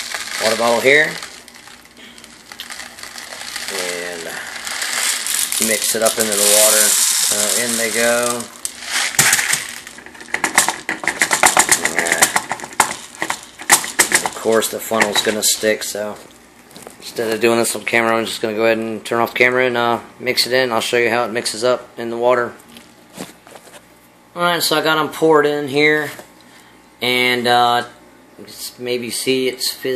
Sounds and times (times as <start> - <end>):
Speech: 0.4 - 1.2, 3.7 - 4.4, 5.6 - 8.5, 11.7 - 12.4, 14.2 - 16.2, 17.0 - 22.6, 24.4 - 26.3, 27.0 - 29.9.